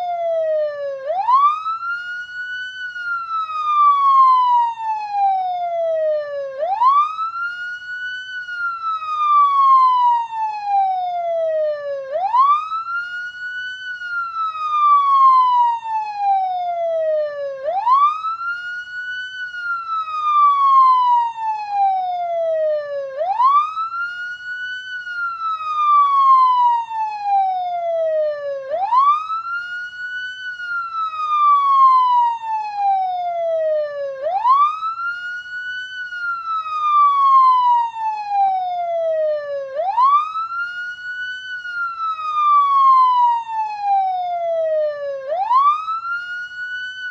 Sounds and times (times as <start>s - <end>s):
Police car (siren): 0.0s - 47.1s.